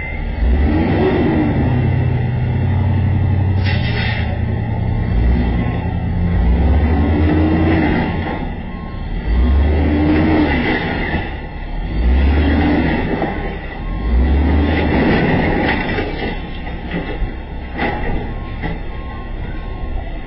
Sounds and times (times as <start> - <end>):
Vehicle: 0.0 - 20.2.